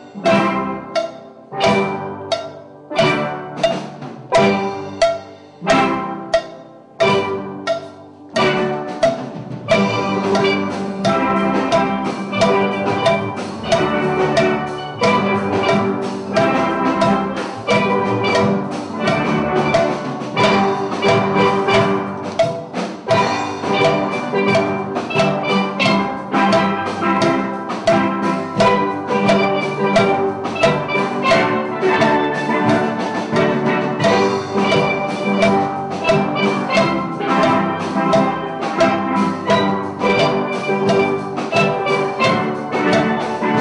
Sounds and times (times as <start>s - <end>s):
Steelpan: 0.0s - 43.6s.